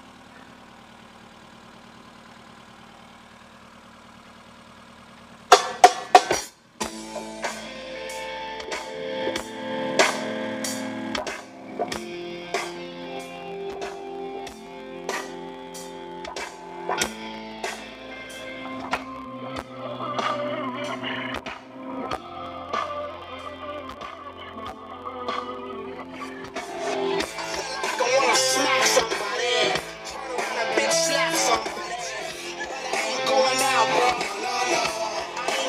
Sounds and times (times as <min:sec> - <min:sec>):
Music: 0:05.5 - 0:35.6.